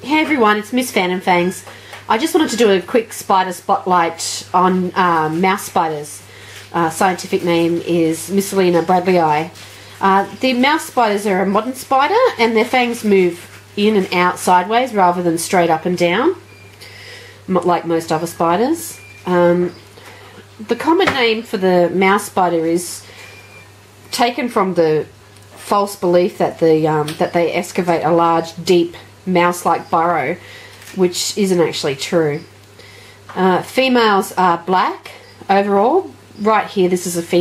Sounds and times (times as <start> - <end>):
Speech: 0.0 - 16.4, 17.5 - 19.8, 20.6 - 23.1, 24.1 - 30.4, 31.0 - 32.5, 33.3 - 37.4.